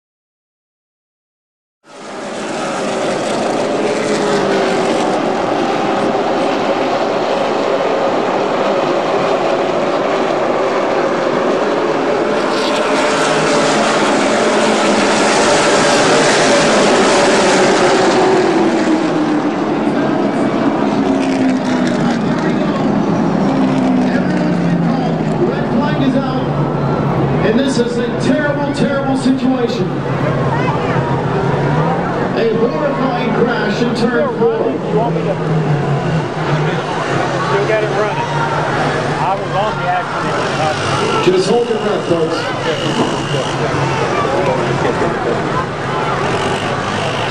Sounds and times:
Outside, urban or manmade: 0:01.8 - 0:47.3
Race car, auto racing: 0:01.8 - 0:47.3.

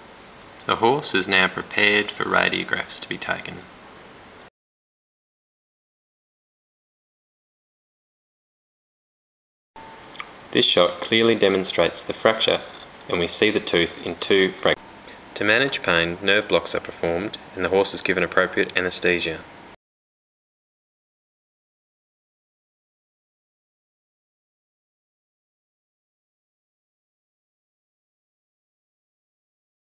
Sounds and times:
Speech: 0:00.6 - 0:03.7, 0:10.5 - 0:14.8, 0:15.4 - 0:19.5.

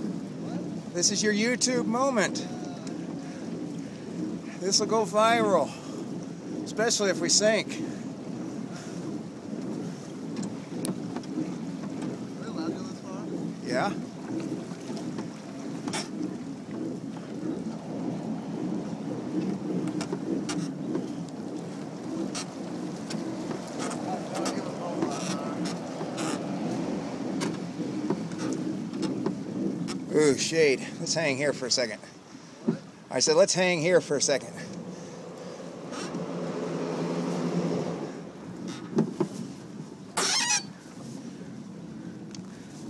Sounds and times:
Boat, Water vehicle: 0:00.0 - 0:42.9.

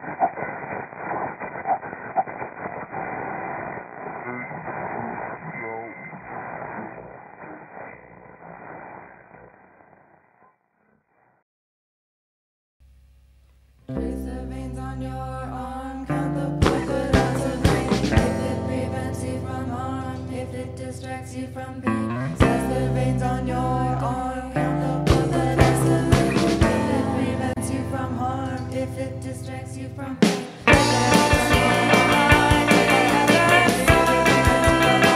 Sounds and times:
Music: 0:13.9 - 0:35.1
Singing: 0:14.0 - 0:35.1.

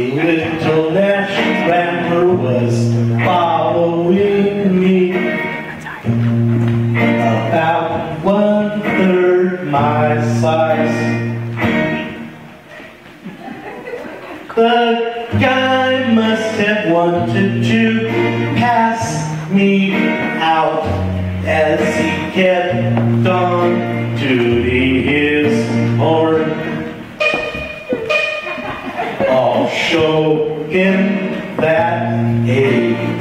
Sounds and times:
Music: 0:00.0 - 0:12.6, 0:14.6 - 0:33.2.

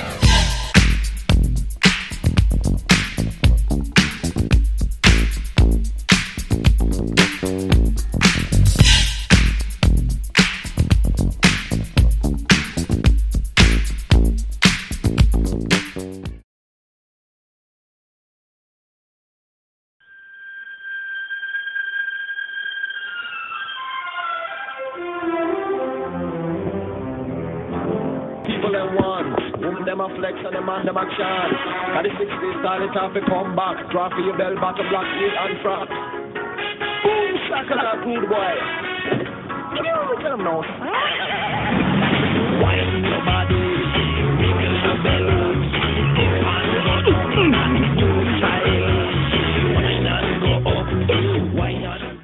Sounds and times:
Music: 0:00.0 - 0:16.4, 0:21.4 - 0:52.2
Speech: 0:28.5 - 0:35.9, 0:37.0 - 0:38.7, 0:39.7 - 0:41.5.

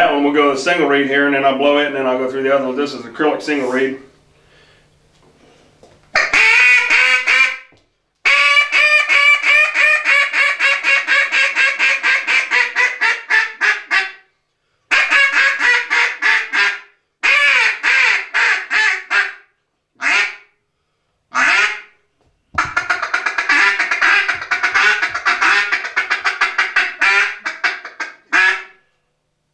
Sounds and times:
Duck: 0:06.2 - 0:07.7, 0:08.3 - 0:14.2, 0:14.9 - 0:19.4, 0:20.0 - 0:20.5, 0:21.3 - 0:21.9, 0:22.6 - 0:28.8.

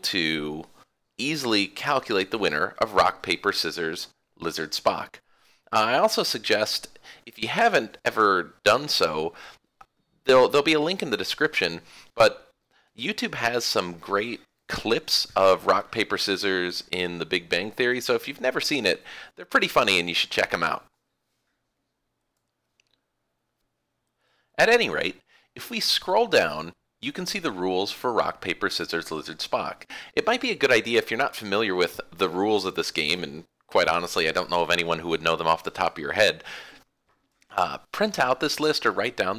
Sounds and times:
Speech: 0:00.0 - 0:09.4, 0:10.2 - 0:20.9, 0:24.6 - 0:36.5, 0:37.5 - 0:39.3.

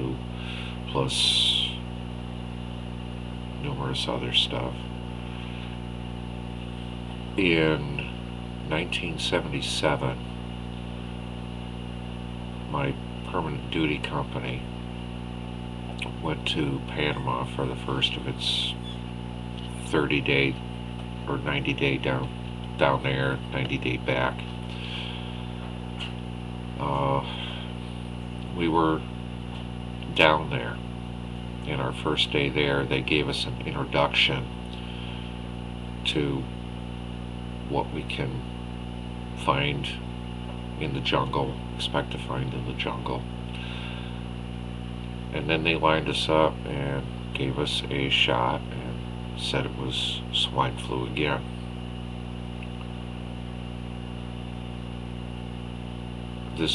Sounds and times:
Speech: 0:00.0 - 0:00.3, 0:00.9 - 0:01.9, 0:03.6 - 0:04.9, 0:07.4 - 0:10.2, 0:12.7 - 0:14.7, 0:16.0 - 0:18.9, 0:19.7 - 0:20.6, 0:21.2 - 0:24.5, 0:26.8 - 0:27.4, 0:28.5 - 0:29.1, 0:30.0 - 0:30.8, 0:31.6 - 0:34.6, 0:36.0 - 0:36.6, 0:37.6 - 0:38.5, 0:39.4 - 0:40.1, 0:40.8 - 0:43.3, 0:45.3 - 0:51.5, 0:56.5 - 0:56.7.

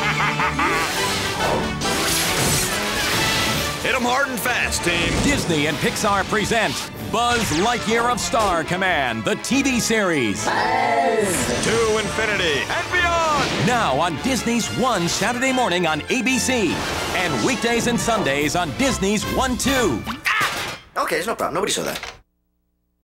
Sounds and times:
Music: 0:00.0 - 0:20.7
Speech: 0:03.9 - 0:10.5, 0:11.6 - 0:20.1, 0:21.0 - 0:22.0.

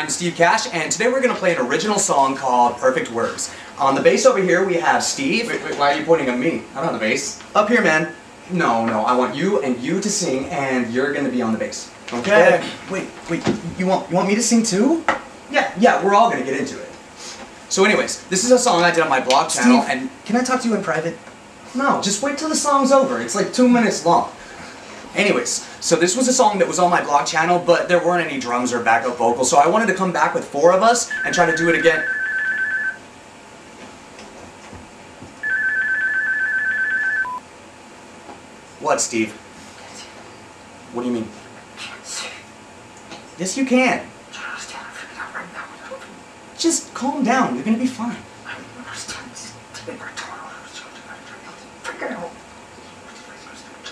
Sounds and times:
Speech: 0:00.0 - 0:17.0, 0:17.7 - 0:24.4, 0:25.1 - 0:32.0, 0:38.8 - 0:39.4, 0:40.9 - 0:41.4, 0:43.4 - 0:44.8, 0:45.4 - 0:50.2, 0:51.8 - 0:52.4
Inside, small room: 0:00.0 - 0:53.9.

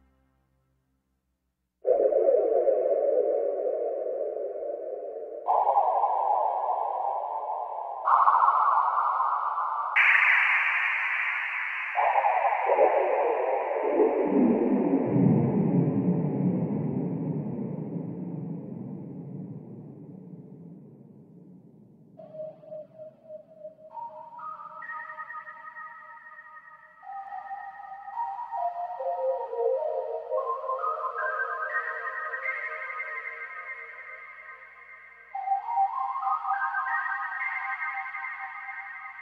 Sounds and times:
Synthesizer: 0:01.8 - 0:39.2.

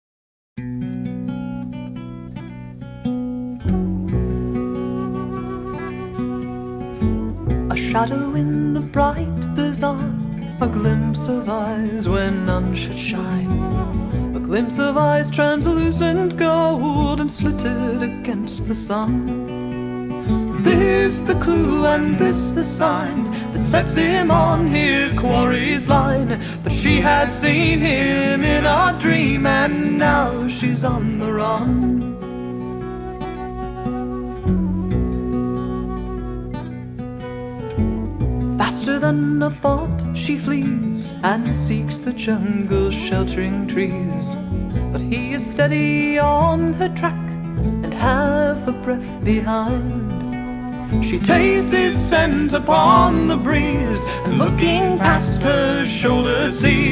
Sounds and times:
Flamenco: 0:00.6 - 0:40.0, 0:44.0 - 0:56.9
Acoustic guitar: 0:00.6 - 0:56.9.

